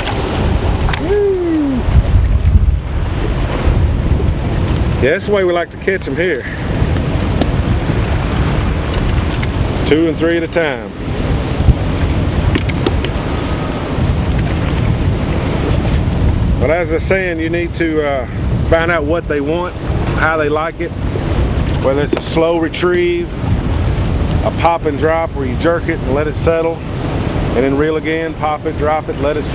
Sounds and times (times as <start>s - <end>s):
Outside, rural or natural: 0.0s - 29.5s
Speech: 5.0s - 6.5s, 16.6s - 20.9s, 21.8s - 23.3s, 24.4s - 26.8s, 27.6s - 29.5s.